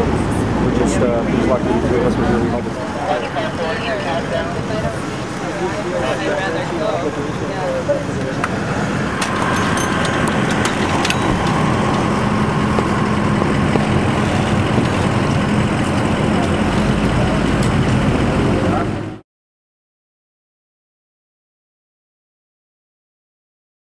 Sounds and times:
Speech: 0.0 - 8.6, 18.5 - 19.2
Vehicle: 0.0 - 19.2.

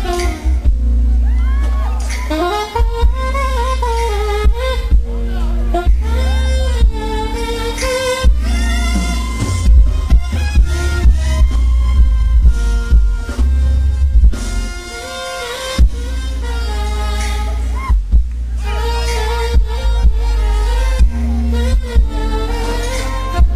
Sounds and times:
Jazz: 0.0 - 23.5.

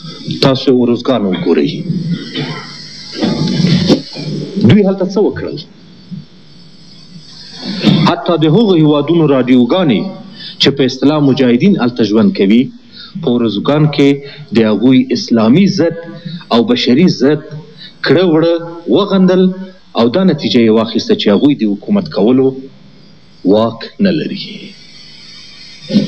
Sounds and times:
Narration, monologue: 0.0 - 26.0
Male speech, man speaking: 0.3 - 1.9, 4.6 - 5.7, 7.9 - 22.7, 23.5 - 24.7.

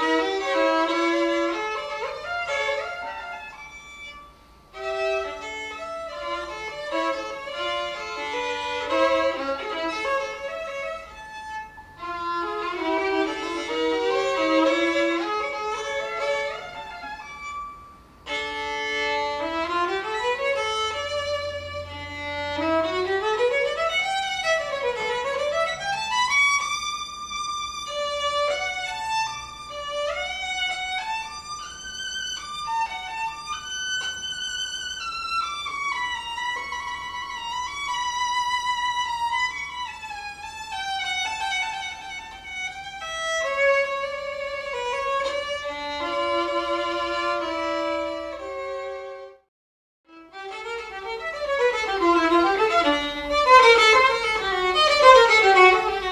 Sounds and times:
Violin, fiddle: 0.0 - 49.5, 50.1 - 56.1.

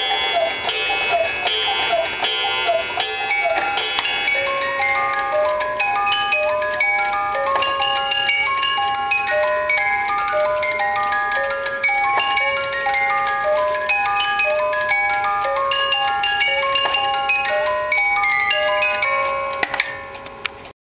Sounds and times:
Music: 0.0 - 20.7.

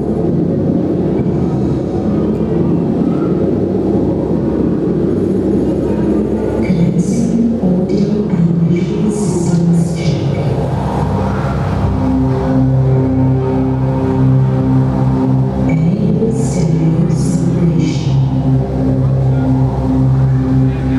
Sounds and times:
Music: 0.0 - 20.9
Speech: 5.6 - 10.6, 15.7 - 18.4.

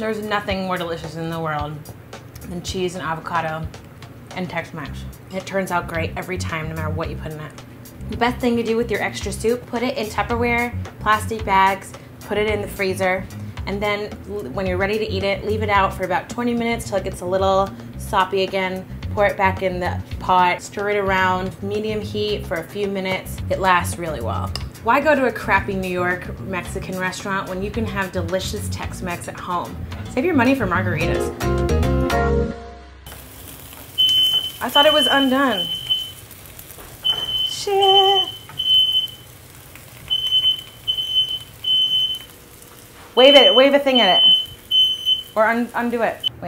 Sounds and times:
Speech: 0.0 - 1.8, 2.4 - 3.7, 4.4 - 7.5, 8.1 - 31.3, 34.6 - 35.7, 37.5 - 38.3, 43.2 - 44.2, 45.4 - 46.4
Smoke detector, smoke alarm: 34.0 - 36.2, 37.0 - 39.3, 40.1 - 42.3, 43.2 - 45.4.

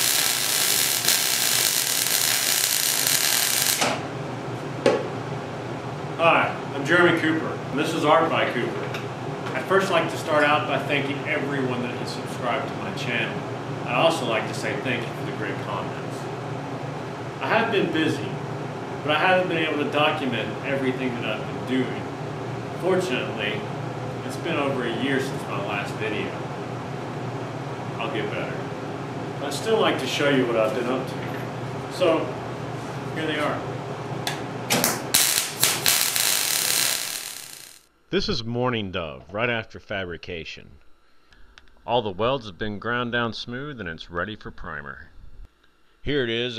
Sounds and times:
Speech: 6.2 - 16.3, 17.4 - 18.4, 19.0 - 22.1, 22.8 - 26.4, 28.0 - 28.7, 29.4 - 32.4, 33.1 - 33.7, 38.1 - 40.8, 41.9 - 45.1, 46.0 - 46.5.

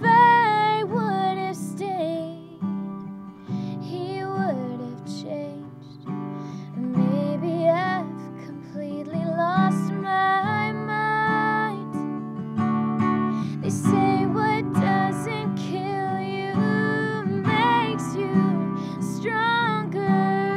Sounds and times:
Music: 0.0 - 20.5.

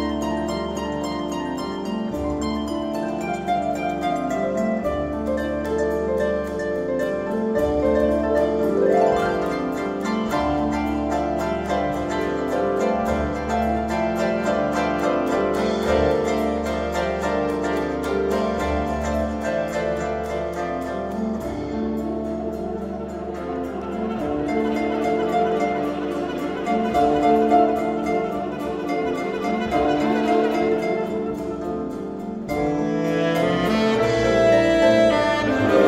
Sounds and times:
Harp: 0.0 - 35.8
Pizzicato: 0.0 - 35.8.

